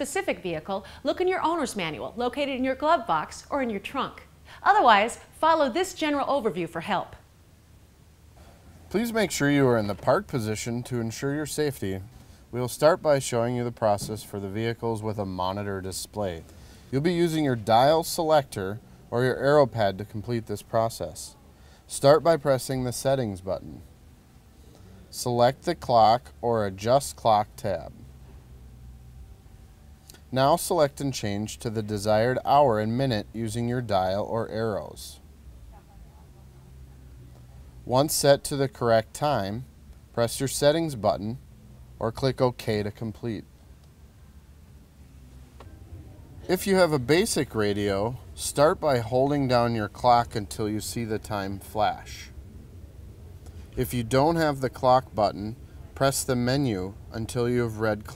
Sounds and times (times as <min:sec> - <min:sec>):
Speech: 0:00.0 - 0:07.2, 0:08.9 - 0:16.4, 0:17.0 - 0:23.9, 0:25.1 - 0:28.0, 0:30.3 - 0:35.2, 0:37.9 - 0:41.4, 0:42.0 - 0:43.5, 0:46.5 - 0:52.3, 0:53.8 - 0:58.1.